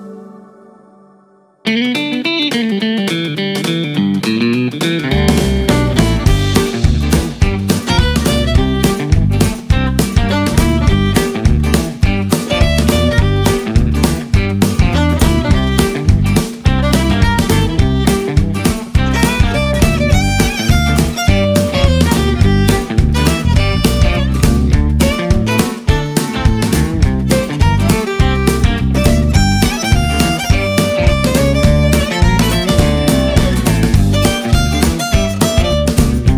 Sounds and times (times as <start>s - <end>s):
Violin, fiddle: 5.8s - 9.4s, 10.2s - 14.2s, 14.9s - 36.2s.